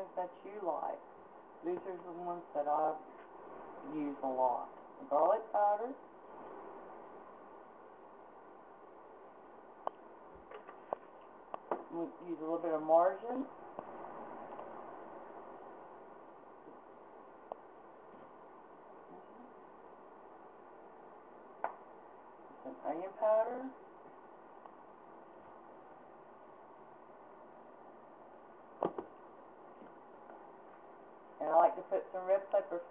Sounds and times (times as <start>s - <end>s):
Speech: 0.0s - 3.1s, 3.8s - 6.0s, 11.8s - 13.6s, 22.6s - 23.8s, 31.4s - 32.9s.